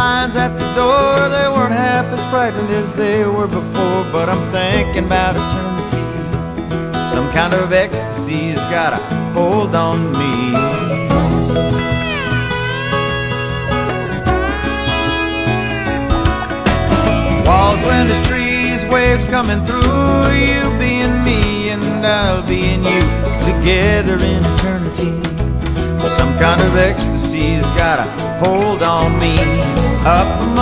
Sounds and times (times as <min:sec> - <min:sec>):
Music: 0:00.0 - 0:30.6.